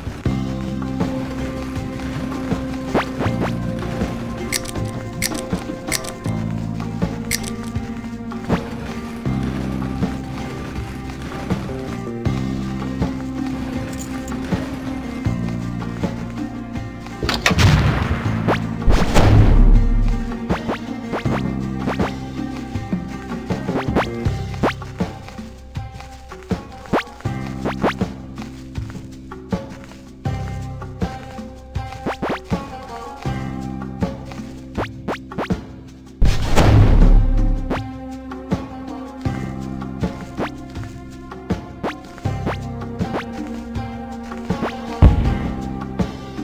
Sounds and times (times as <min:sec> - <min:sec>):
Music: 0:00.0 - 0:46.4.